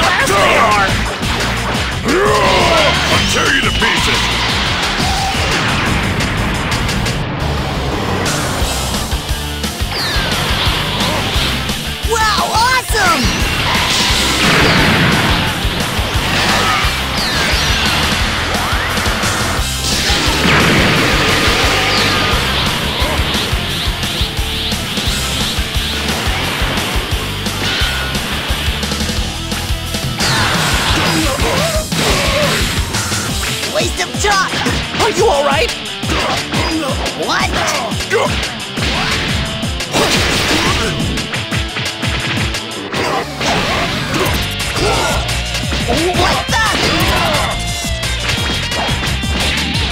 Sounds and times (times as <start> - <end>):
Music: 0.0 - 49.9
Speech: 2.1 - 4.2, 33.7 - 38.4, 45.9 - 47.6.